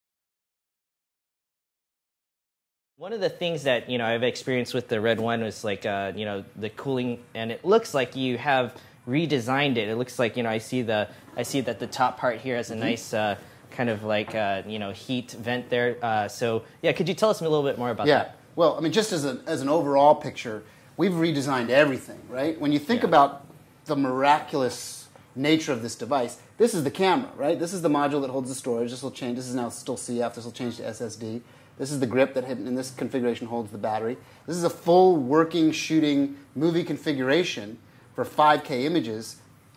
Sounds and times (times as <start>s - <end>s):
Speech: 3.0s - 39.4s.